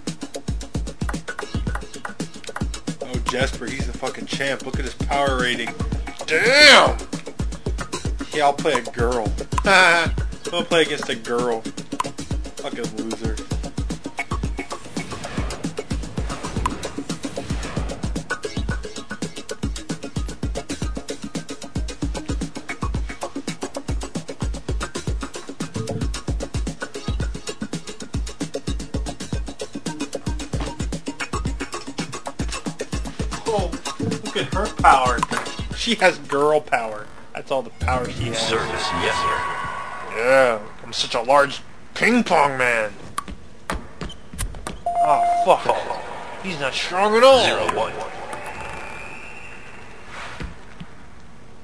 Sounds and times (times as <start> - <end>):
Music: 0.0 - 41.7, 42.6 - 50.9
Speech: 3.0 - 7.0, 8.3 - 11.6, 12.6 - 13.4, 33.4 - 39.4, 40.1 - 43.0, 46.4 - 48.1.